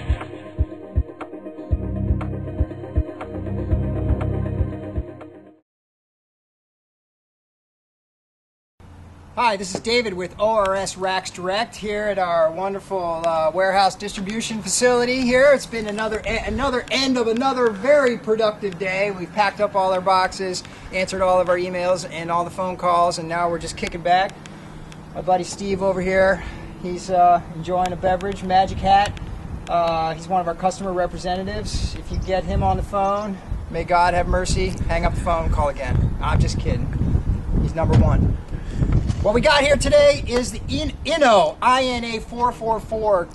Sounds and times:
Speech: 9.4 - 24.3, 25.2 - 36.9, 37.6 - 38.2, 39.2 - 43.3.

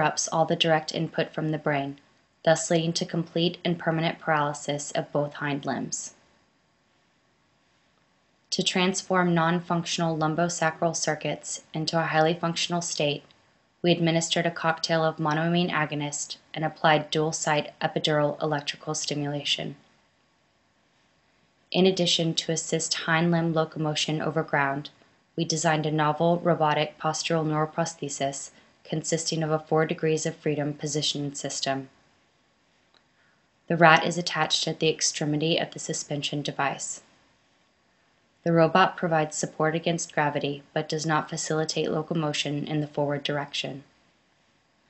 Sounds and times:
Speech: 0.0 - 6.2, 8.5 - 19.8, 21.8 - 32.0, 33.7 - 37.0, 38.5 - 43.9.

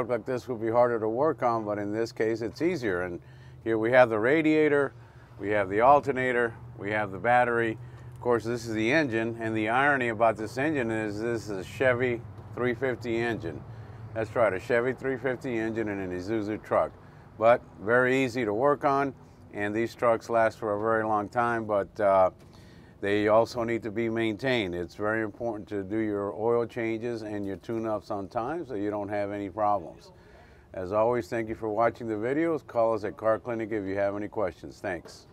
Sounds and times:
Speech: 0.0 - 13.6, 14.2 - 22.4, 23.0 - 35.3.

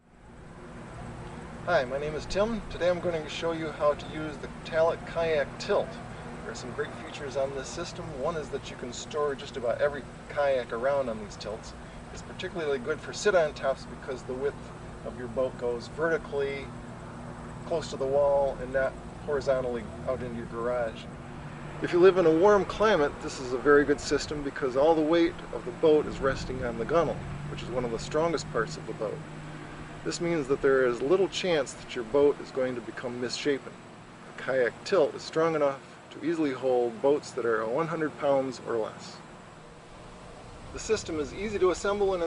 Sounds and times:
Speech: 1.7 - 16.7, 17.6 - 21.1, 21.8 - 29.2, 30.0 - 33.8, 34.4 - 39.2, 40.8 - 42.2.

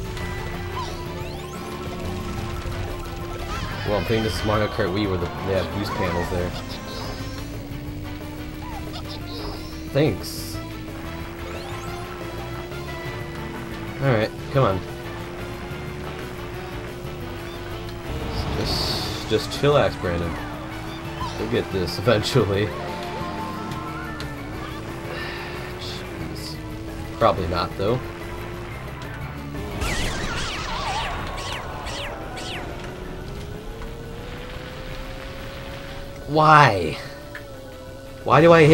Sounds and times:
Vehicle: 0.0 - 38.7.

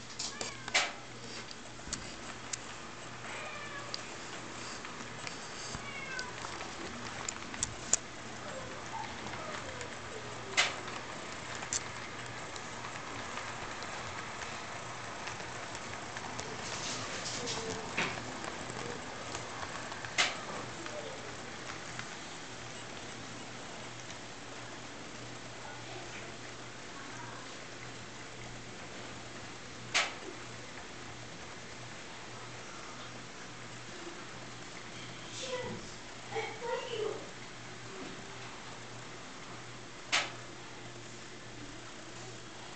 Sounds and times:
Speech: 8.3 - 11.1, 16.8 - 19.3, 25.6 - 27.7, 35.0 - 38.5.

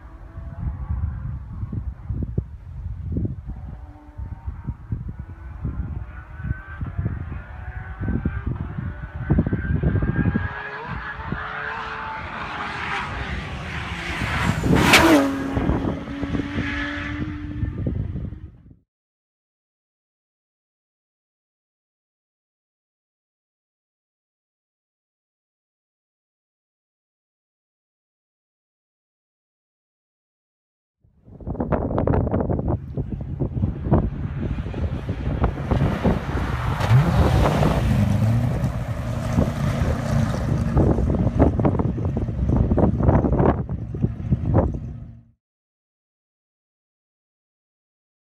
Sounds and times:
Car: 0.0 - 18.8, 31.2 - 45.4
Outside, rural or natural: 0.0 - 18.9, 31.0 - 45.4.

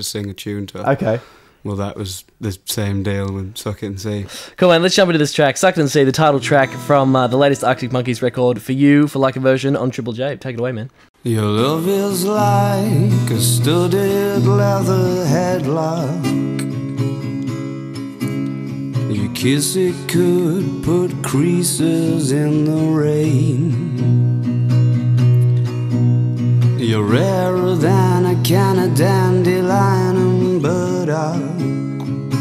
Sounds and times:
Speech: 0.0 - 11.6
Music: 6.2 - 8.3, 11.2 - 32.4
Singing: 11.2 - 16.3.

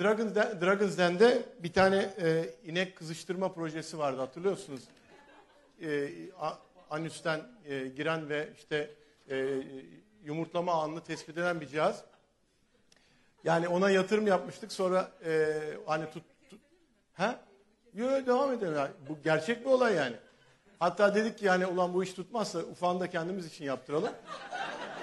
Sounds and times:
Speech: 0.0 - 4.9, 5.8 - 12.1, 13.5 - 20.2, 20.8 - 24.2.

